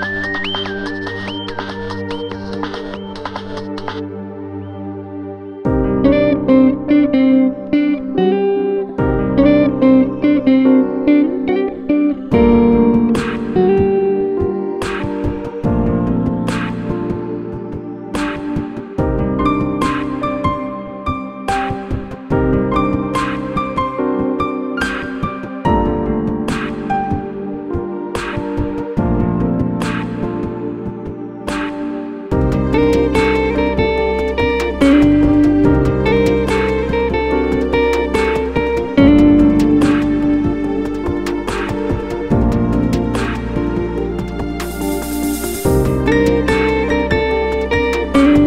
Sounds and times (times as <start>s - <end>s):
Music: 0.0s - 48.4s.